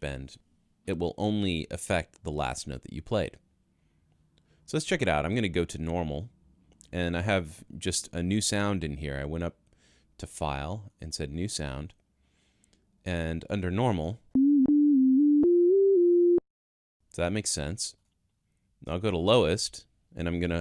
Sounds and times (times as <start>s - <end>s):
Speech: 0.0s - 3.4s, 4.7s - 6.3s, 6.9s - 9.6s, 10.2s - 12.0s, 13.1s - 14.2s, 17.1s - 18.0s, 18.8s - 20.6s
Synthesizer: 14.4s - 16.4s.